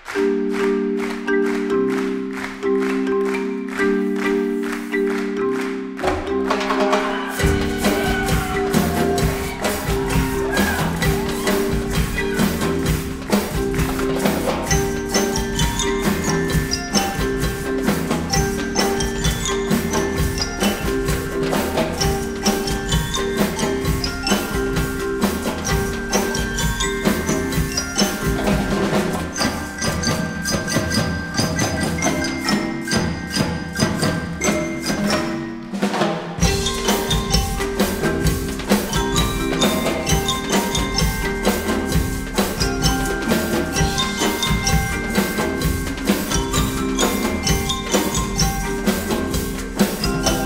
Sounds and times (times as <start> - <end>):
Percussion: 0.0 - 50.4.